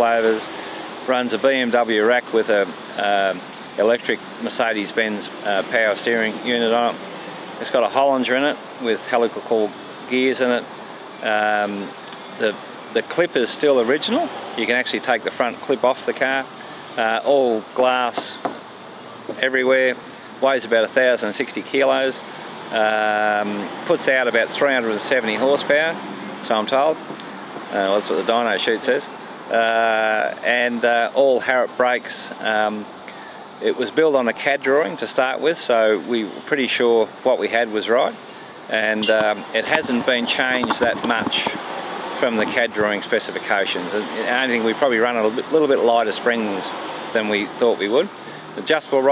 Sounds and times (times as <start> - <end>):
Speech: 0.0 - 7.0, 7.6 - 18.4, 19.3 - 27.0, 27.7 - 32.9, 33.6 - 41.6, 42.2 - 49.1.